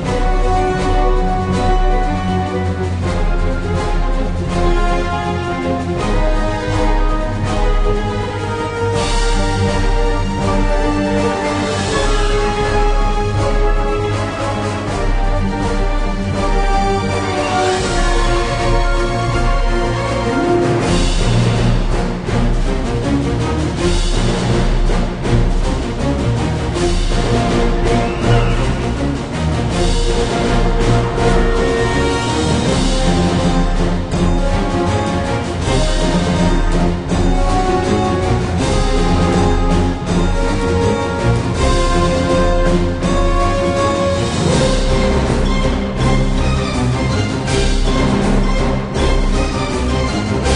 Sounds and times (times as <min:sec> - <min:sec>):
Music: 0:00.0 - 0:50.5.